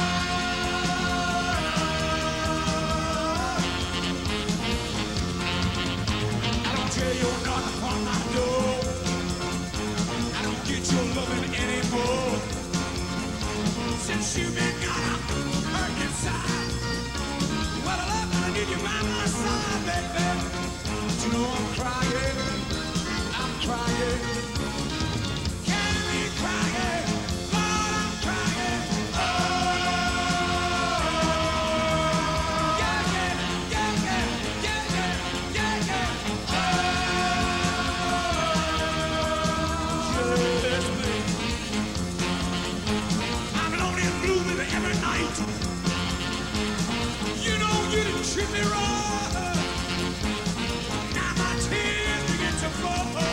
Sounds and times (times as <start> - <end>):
Music: 0.0 - 53.3.